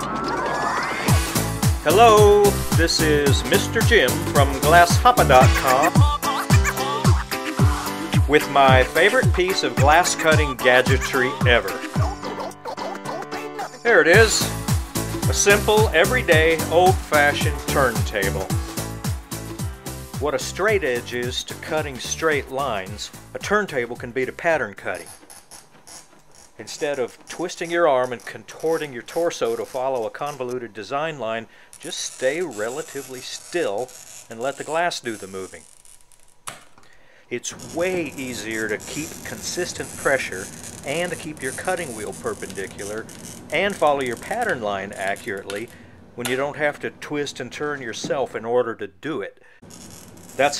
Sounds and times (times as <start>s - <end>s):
Speech: 1.9s - 6.2s, 8.3s - 11.9s, 13.9s - 14.6s, 15.3s - 18.7s, 20.2s - 25.1s, 26.6s - 35.6s, 37.3s - 49.4s.